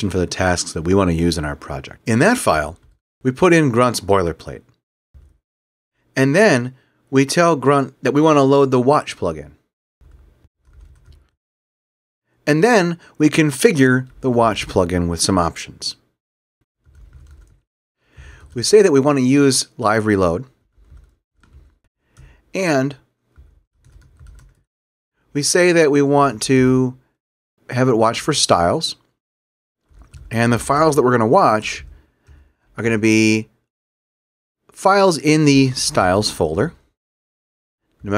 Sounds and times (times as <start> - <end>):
Speech: 0.0 - 4.8, 6.2 - 9.6, 12.5 - 16.1, 18.6 - 20.5, 22.6 - 23.1, 25.3 - 27.0, 27.7 - 29.1, 30.3 - 32.0, 32.8 - 33.5, 34.8 - 36.8
Typing: 10.1 - 11.4, 16.8 - 17.6, 23.4 - 24.6, 29.8 - 30.3.